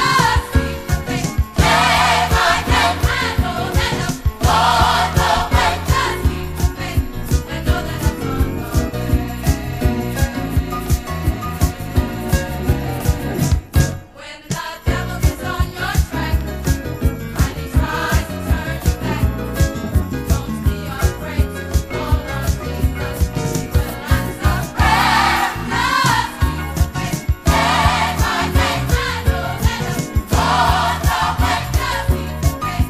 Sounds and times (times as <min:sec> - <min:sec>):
Choir: 0:00.0 - 0:12.6, 0:14.0 - 0:32.9
Funk: 0:00.0 - 0:14.0, 0:14.6 - 0:32.9
Soul music: 0:00.0 - 0:32.9.